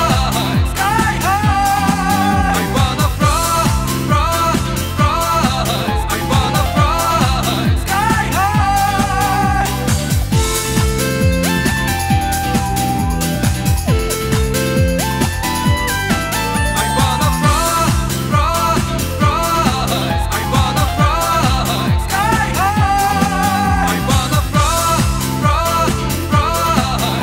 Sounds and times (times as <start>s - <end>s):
Dance music: 0.0s - 27.2s.